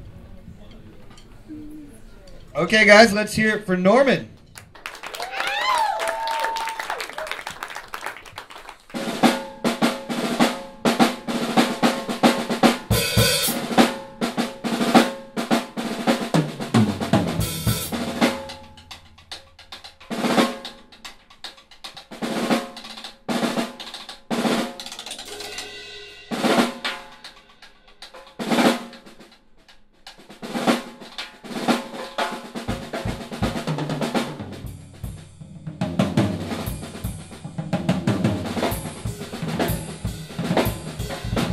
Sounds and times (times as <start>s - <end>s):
Drum kit: 4.3s - 41.5s
Bass drum: 16.3s - 20.7s, 32.7s - 41.5s.